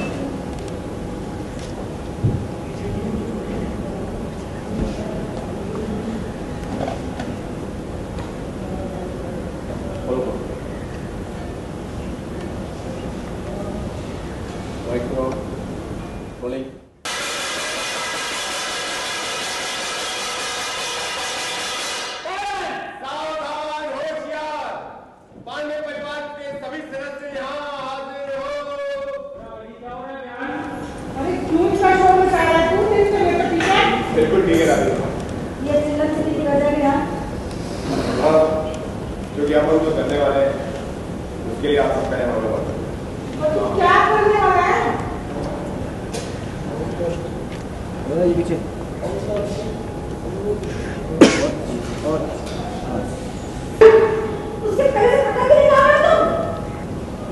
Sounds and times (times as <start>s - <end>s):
Inside, large room or hall: 0.0s - 57.3s.